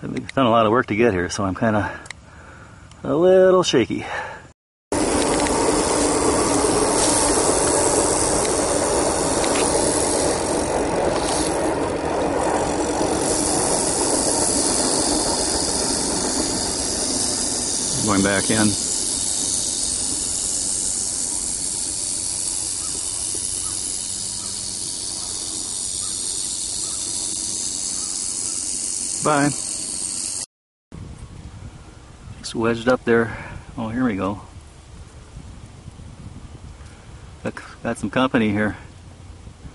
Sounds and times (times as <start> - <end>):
Speech: 0.0 - 2.0, 3.0 - 4.2, 17.9 - 18.8, 29.2 - 29.6, 32.4 - 34.5, 37.4 - 38.9.